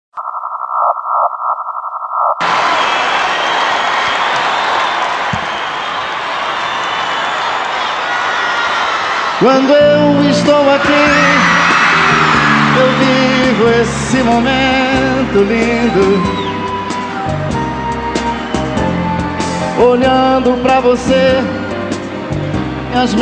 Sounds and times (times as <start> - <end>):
Singing: 9.4 - 16.7, 19.6 - 21.7
Music: 9.5 - 23.2.